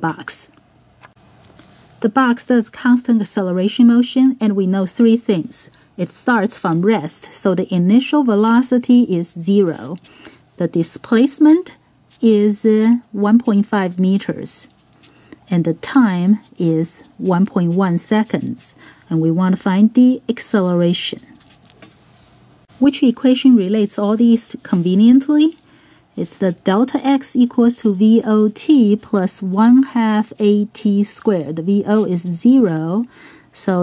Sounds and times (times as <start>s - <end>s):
Speech: 0.0s - 0.6s, 2.0s - 14.8s, 15.5s - 21.3s, 22.8s - 25.6s, 26.2s - 33.8s.